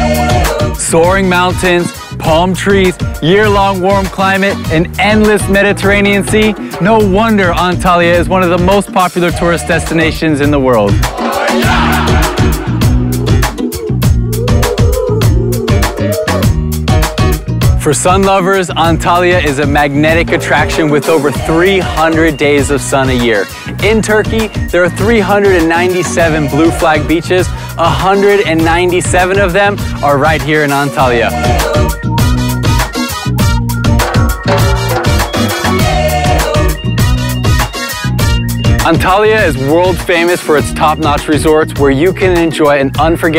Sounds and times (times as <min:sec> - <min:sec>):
Music: 0:00.0 - 0:43.3
Speech: 0:00.8 - 0:11.0, 0:17.8 - 0:31.4, 0:38.9 - 0:43.3.